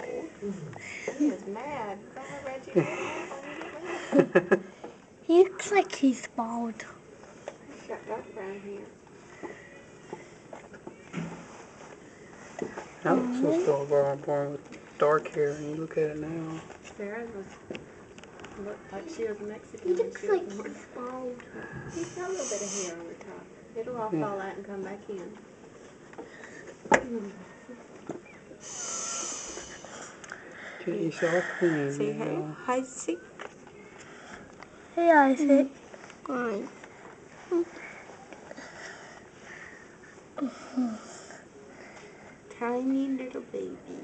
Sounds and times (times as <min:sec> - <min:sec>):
Child speech, kid speaking: 0:05.3 - 0:07.0, 0:13.1 - 0:13.9, 0:18.9 - 0:23.1, 0:35.0 - 0:36.8, 0:42.5 - 0:44.0.